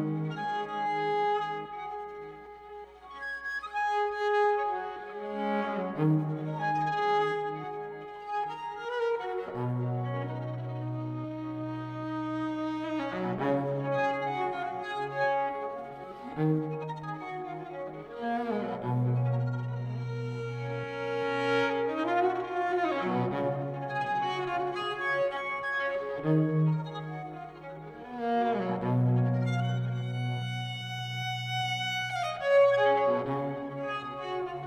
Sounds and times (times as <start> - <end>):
Violin, fiddle: 0.0 - 34.6.